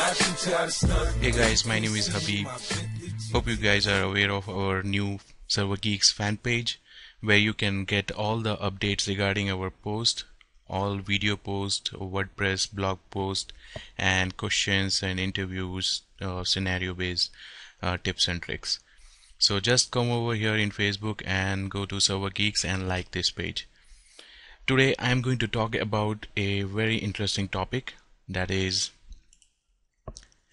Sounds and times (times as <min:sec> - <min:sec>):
Speech: 0:01.2 - 0:23.7, 0:24.7 - 0:29.0.